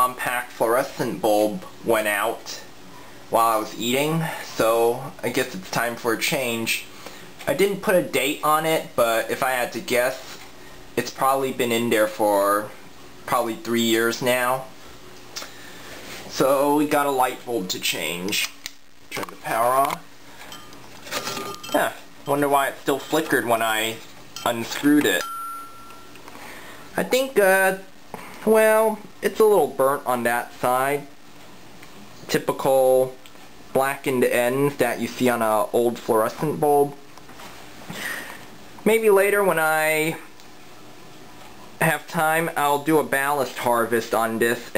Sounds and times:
Speech: 0.0s - 2.7s, 3.3s - 10.4s, 11.0s - 14.8s, 16.3s - 20.1s, 21.7s - 25.3s, 27.0s - 31.2s, 32.3s - 37.0s, 38.8s - 40.3s, 41.8s - 44.7s
Inside, small room: 0.0s - 44.7s.

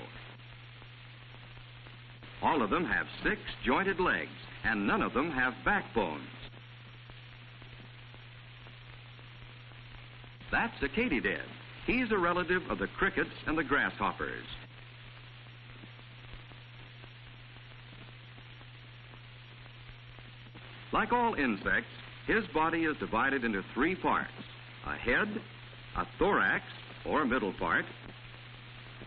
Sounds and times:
Speech: 2.4s - 6.5s, 10.5s - 14.6s, 20.9s - 28.0s.

